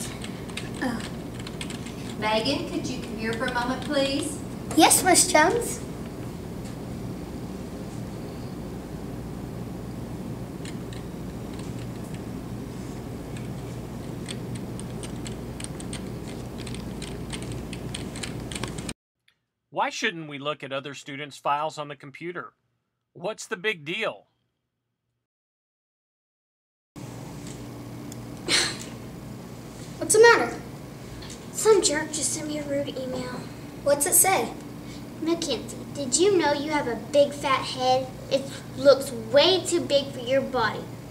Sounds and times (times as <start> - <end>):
Speech: 2.2 - 5.8, 19.8 - 22.5, 23.2 - 24.2, 35.2 - 40.9.